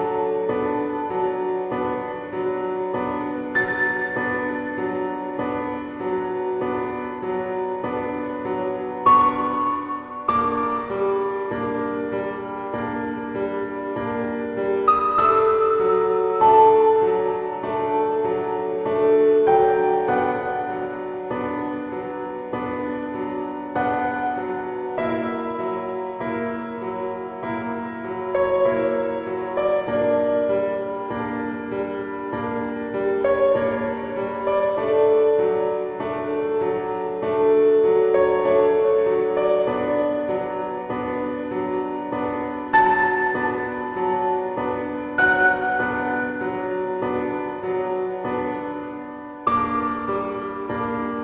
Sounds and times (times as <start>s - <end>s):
Music: 0.0s - 51.2s.